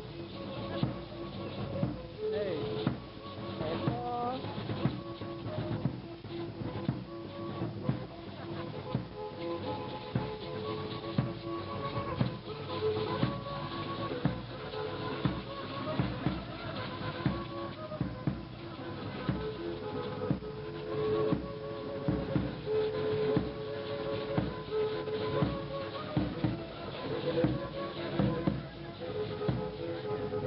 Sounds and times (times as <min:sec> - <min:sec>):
Violin, fiddle: 0:00.0 - 0:30.4.